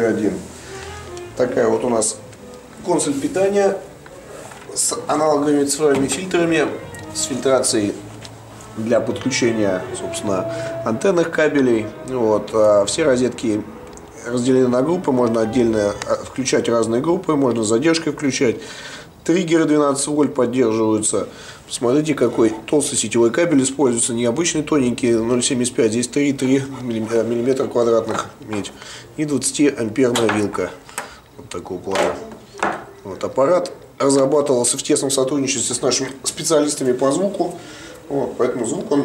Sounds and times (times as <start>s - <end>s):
Speech: 0.0s - 0.5s, 1.4s - 2.2s, 2.8s - 3.9s, 4.7s - 8.0s, 8.8s - 18.6s, 19.2s - 30.8s, 31.4s - 39.0s
Music: 0.0s - 17.1s.